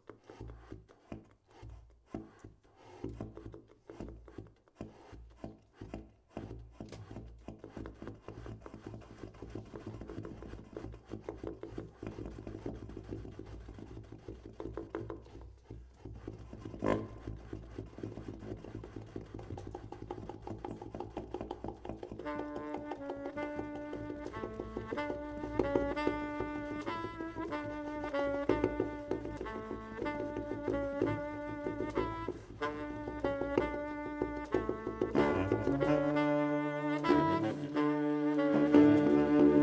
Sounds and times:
Saxophone: 16.7s - 18.8s, 21.9s - 39.6s.

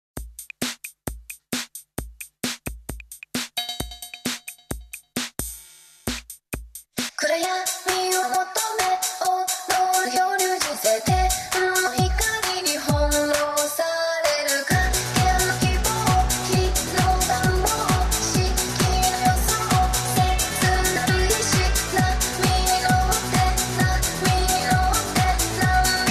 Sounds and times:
Drum machine: 0.2s - 26.1s.

